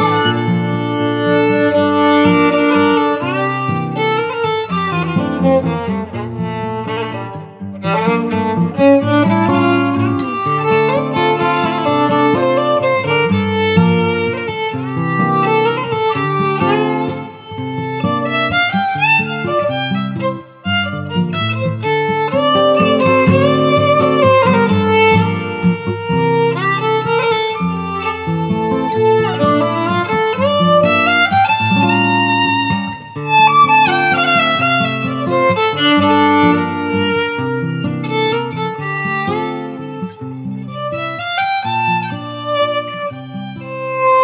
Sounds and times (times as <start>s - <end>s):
Violin, fiddle: 0.0s - 44.2s.